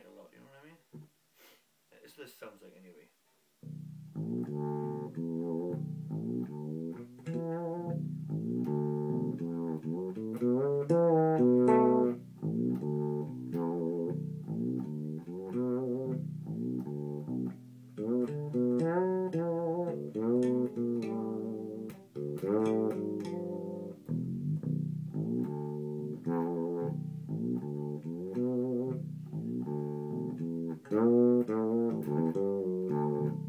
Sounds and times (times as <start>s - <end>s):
Bass guitar: 3.6s - 33.4s
Bowed string instrument: 3.6s - 33.4s.